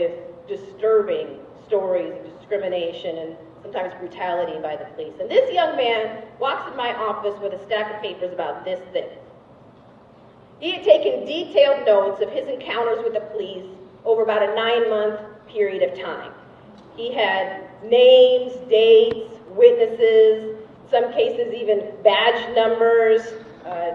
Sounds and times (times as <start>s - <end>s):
Speech: 0.0s - 9.2s, 10.6s - 23.9s.